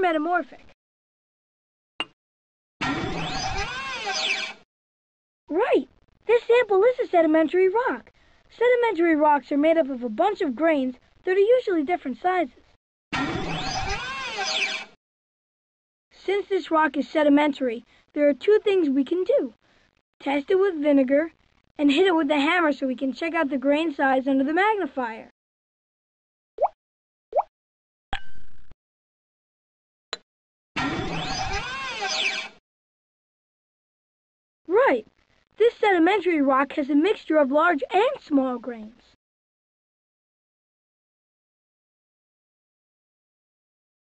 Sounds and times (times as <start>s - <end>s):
Speech: 0.0s - 0.7s, 5.5s - 12.6s, 16.2s - 19.6s, 20.2s - 25.3s, 34.7s - 39.2s.